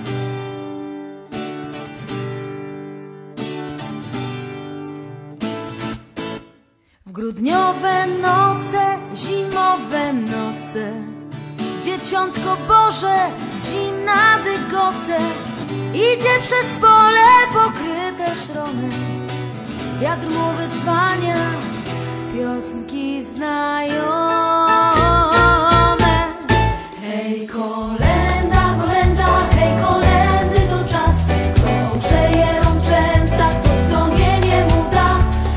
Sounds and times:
Christian music: 24.4 - 35.5
Christmas music: 24.7 - 35.5.

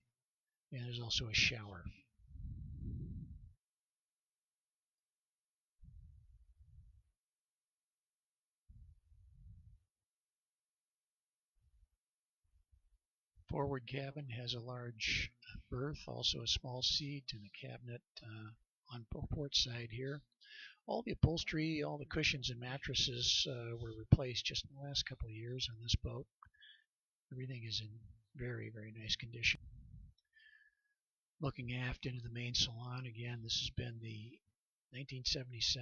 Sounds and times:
Silence: 2.1 - 3.6, 5.8 - 7.1, 8.6 - 10.0.

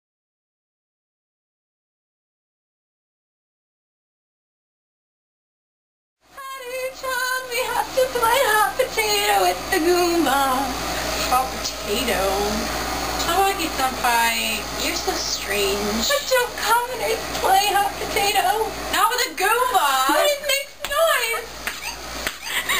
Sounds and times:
Speech: 6.4 - 21.5.

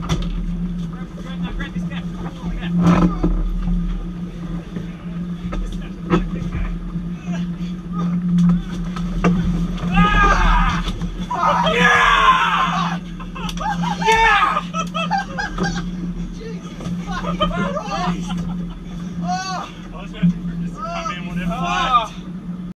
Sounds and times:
Motorboat, speedboat: 0.0 - 22.7.

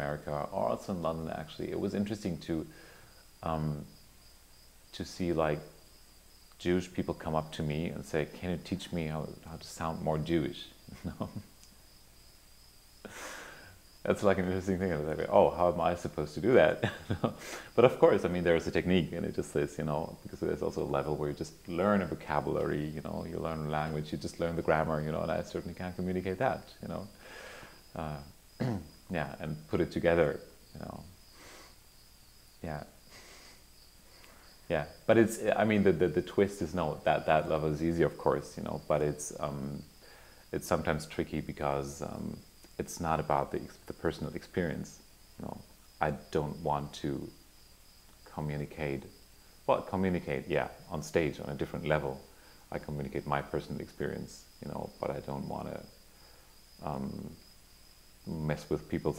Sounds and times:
Speech: 0.0 - 2.8, 3.4 - 3.9, 4.9 - 5.8, 6.6 - 11.4, 14.1 - 27.2, 28.0 - 31.1, 32.6 - 33.0, 34.7 - 39.9, 40.5 - 47.4, 48.3 - 49.1, 49.7 - 55.9, 56.8 - 57.4, 58.3 - 59.1.

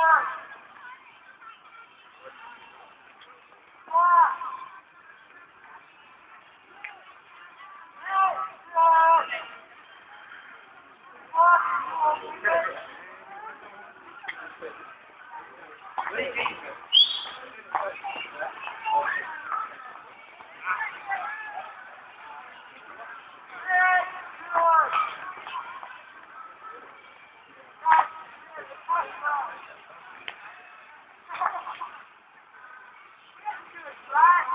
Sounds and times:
Outside, urban or manmade: 0.0 - 34.5.

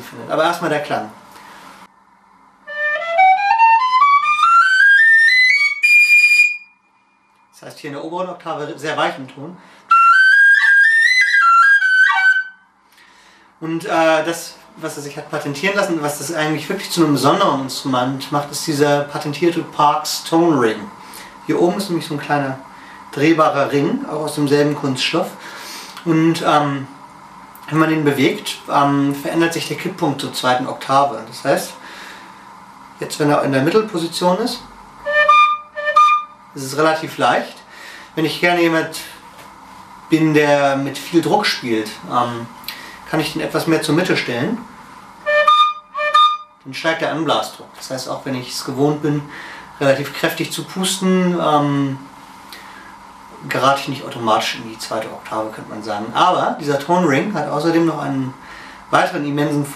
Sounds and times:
Speech: 0.0 - 1.2, 7.6 - 9.6, 13.6 - 25.4, 26.0 - 27.0, 27.6 - 31.8, 33.0 - 34.7, 36.6 - 39.2, 40.1 - 44.7, 46.7 - 52.1, 53.4 - 59.7
Music: 2.7 - 6.8, 9.9 - 12.6, 35.1 - 36.4, 45.3 - 46.6.

